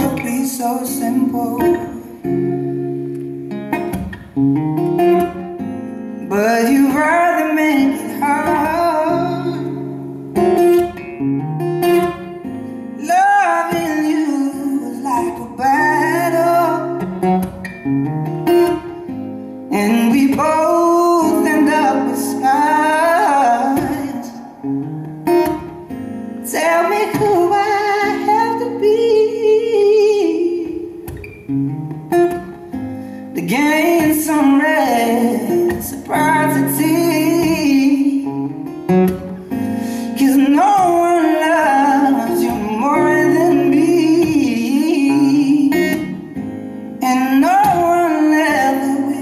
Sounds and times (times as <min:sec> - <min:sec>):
Music: 0:00.0 - 0:49.2.